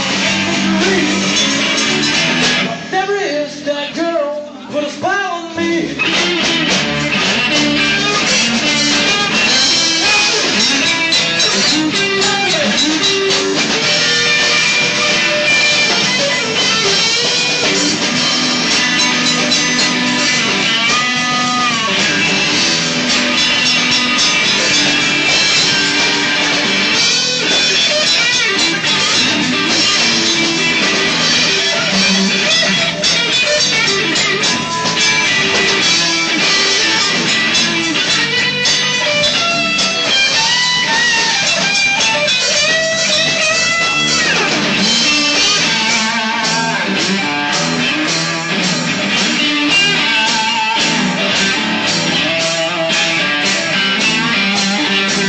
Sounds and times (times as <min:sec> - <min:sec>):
Rock music: 0:00.0 - 0:55.2.